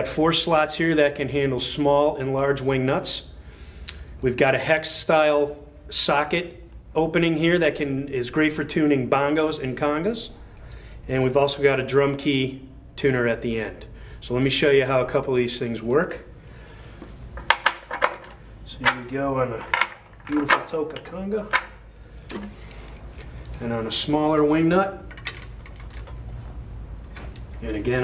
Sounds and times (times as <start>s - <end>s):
Speech: 0.0s - 3.3s, 4.2s - 10.3s, 11.1s - 16.2s, 18.7s - 19.7s, 20.3s - 21.6s, 23.6s - 25.1s, 27.6s - 28.0s.